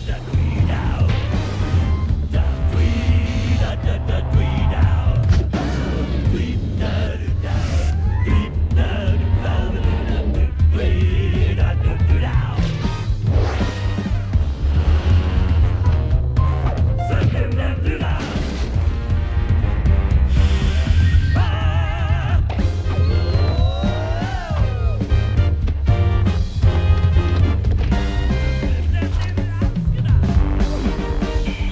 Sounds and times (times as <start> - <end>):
Music: 0.0 - 31.7.